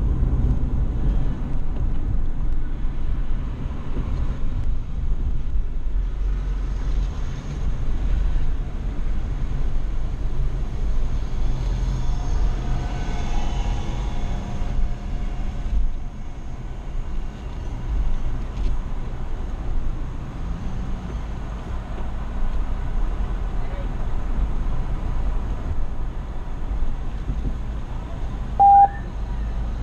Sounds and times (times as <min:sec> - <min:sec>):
Car: 0:00.0 - 0:29.8
Speech: 0:23.6 - 0:24.0.